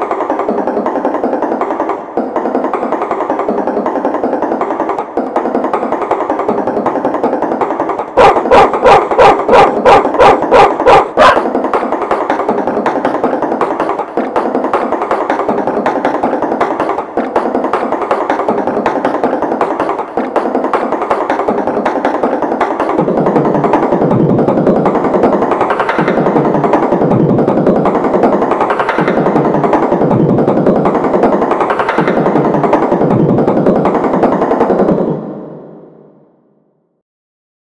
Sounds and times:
Music: 0.0 - 37.0.

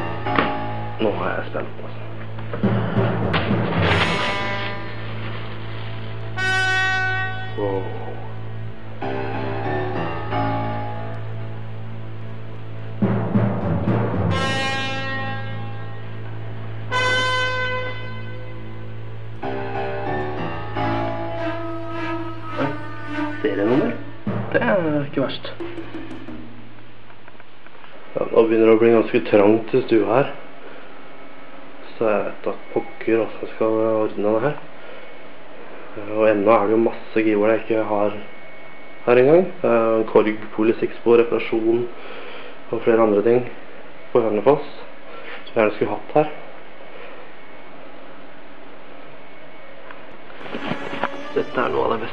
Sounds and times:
Timpani: 0.0 - 27.2, 50.4 - 52.1.

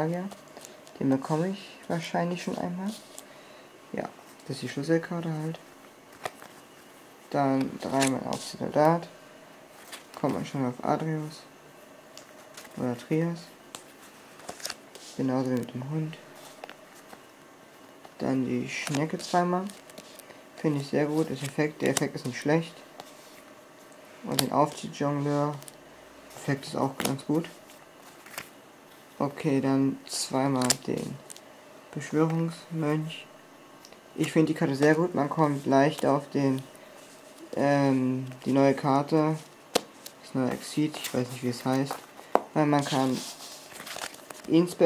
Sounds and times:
Speech: 0.0 - 0.4, 1.0 - 3.0, 3.9 - 5.6, 7.3 - 9.2, 10.2 - 11.5, 12.8 - 13.6, 15.2 - 16.2, 18.2 - 19.8, 20.6 - 22.8, 24.2 - 25.7, 26.4 - 27.6, 29.2 - 31.2, 32.0 - 33.3, 34.2 - 36.7, 37.5 - 39.5, 40.2 - 42.0, 42.6 - 43.4, 44.5 - 44.8.

